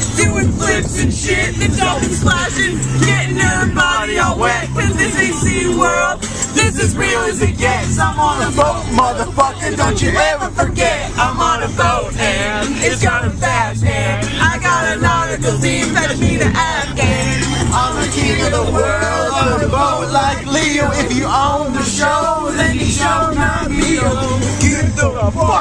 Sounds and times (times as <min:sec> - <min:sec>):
Music: 0:00.0 - 0:25.6.